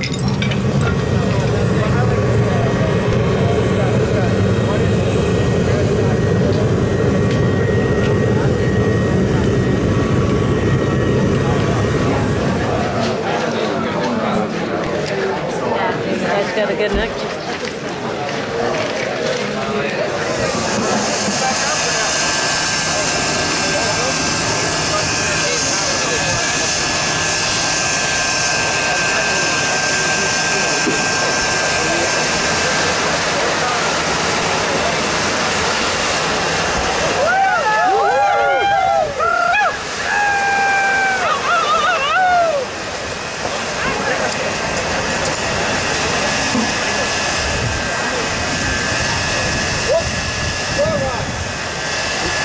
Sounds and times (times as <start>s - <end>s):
Speech: 0.1s - 9.9s, 10.7s - 39.4s, 43.4s - 51.5s.